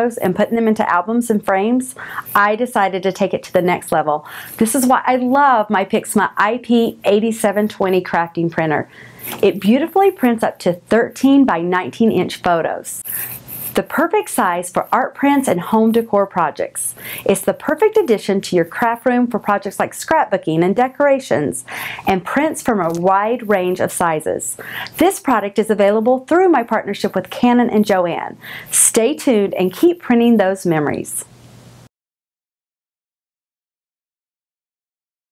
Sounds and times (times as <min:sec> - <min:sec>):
Speech: 0:00.0 - 0:13.0, 0:13.8 - 0:31.3.